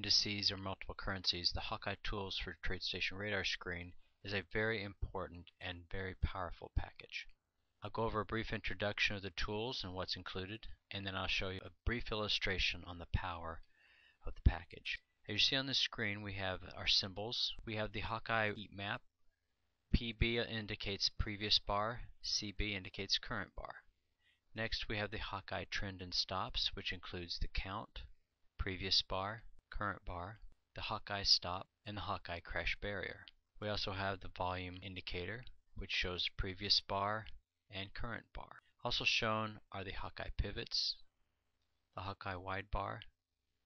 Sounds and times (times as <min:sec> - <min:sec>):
Speech: 0:00.0 - 0:13.6, 0:14.2 - 0:19.1, 0:19.9 - 0:23.9, 0:24.5 - 0:41.1, 0:42.0 - 0:43.2.